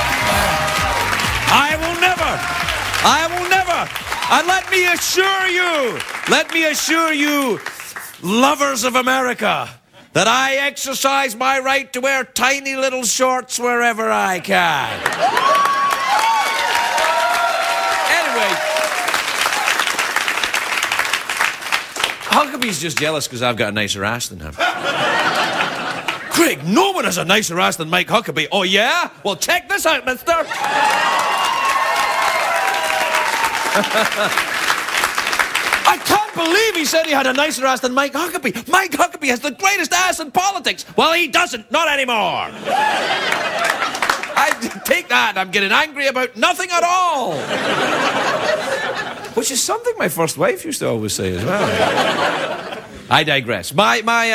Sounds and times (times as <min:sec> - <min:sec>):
Speech: 0:03.0 - 0:07.6, 0:08.2 - 0:15.0, 0:22.3 - 0:24.6, 0:26.3 - 0:30.5, 0:35.9 - 0:42.5, 0:44.4 - 0:47.4, 0:49.4 - 0:51.8, 0:53.1 - 0:54.3.